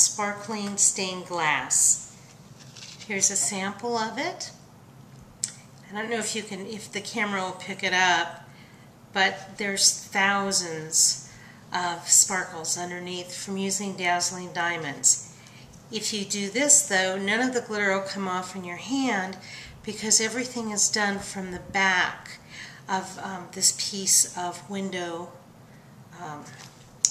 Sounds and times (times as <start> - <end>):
Speech: 0.0 - 2.1, 3.1 - 4.6, 5.9 - 8.4, 9.2 - 15.2, 15.9 - 25.4, 26.2 - 26.6.